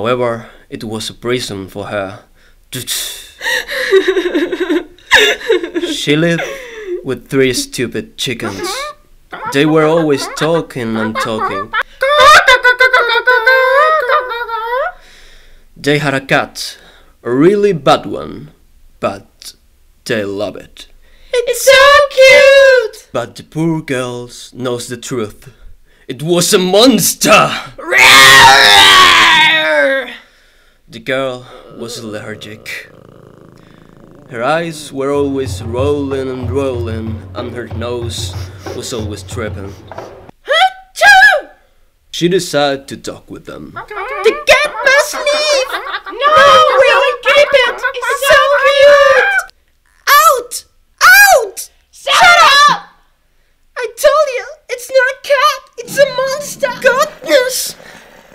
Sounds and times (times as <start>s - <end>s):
Speech: 0.0s - 3.4s, 5.9s - 12.4s, 15.8s - 27.8s, 30.9s - 32.9s, 34.3s - 39.8s, 42.1s - 49.5s, 53.8s - 57.8s.